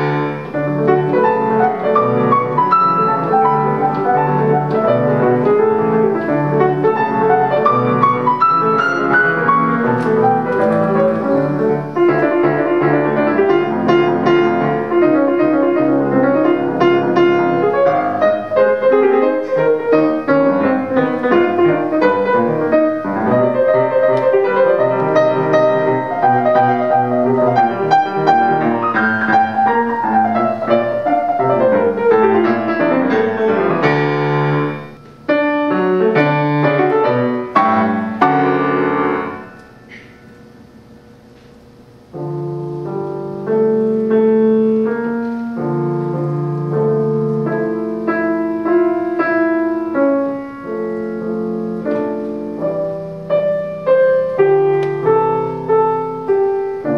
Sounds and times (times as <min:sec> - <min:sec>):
Music: 0:00.0 - 0:56.9.